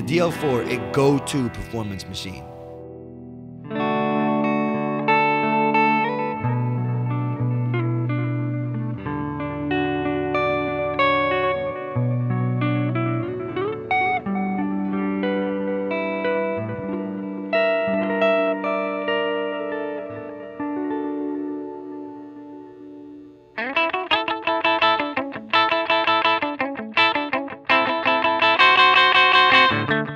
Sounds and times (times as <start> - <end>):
Effects unit: 0.0 - 30.1
Guitar: 0.0 - 30.1.